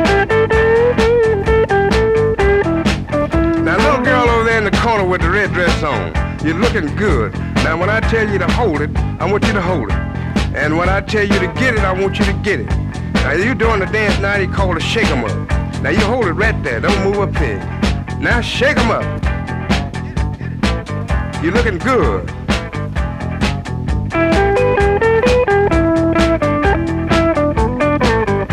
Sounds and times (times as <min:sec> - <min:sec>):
Blues: 0:00.0 - 0:28.5
Speech: 0:03.6 - 0:19.2, 0:21.4 - 0:22.3
Strum: 0:15.0 - 0:28.5.